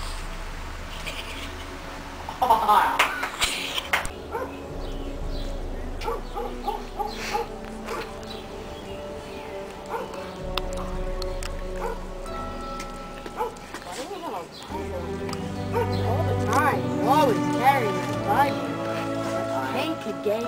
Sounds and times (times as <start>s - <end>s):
Outside, urban or manmade: 0.0s - 20.4s
Music: 0.3s - 20.4s.